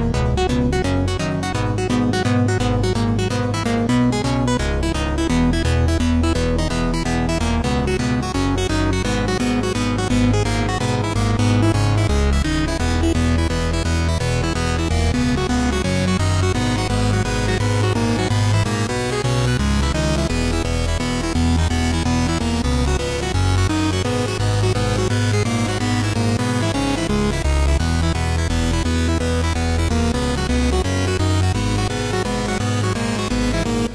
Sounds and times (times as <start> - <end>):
Music: 0.0 - 33.9.